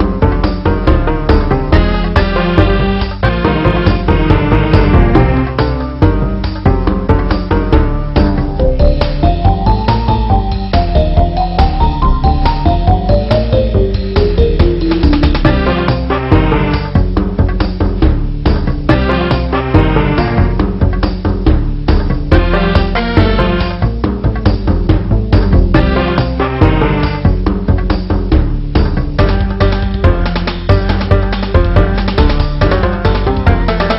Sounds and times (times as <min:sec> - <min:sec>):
Music: 0:00.0 - 0:33.9.